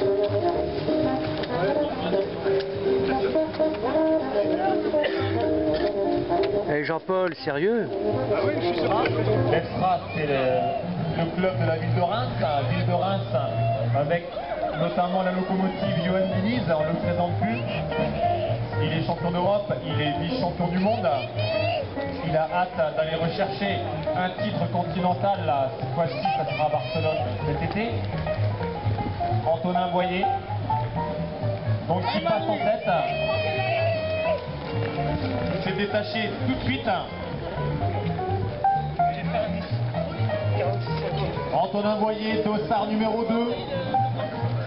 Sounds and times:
Music: 0.0s - 44.6s
Run: 0.0s - 44.6s.

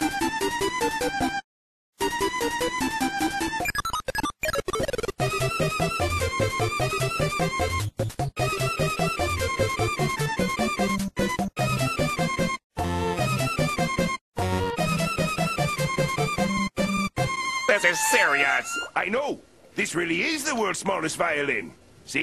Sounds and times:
Musical instrument: 11.6s - 19.0s.

